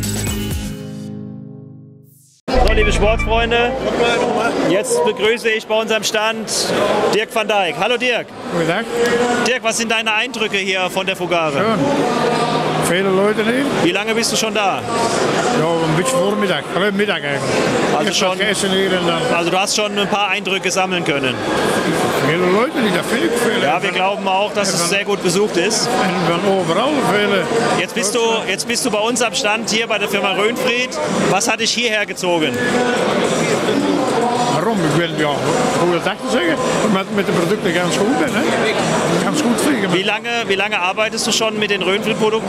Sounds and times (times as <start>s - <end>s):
Inside, large room or hall: 2.5s - 42.4s
Inside, public space: 2.5s - 42.4s.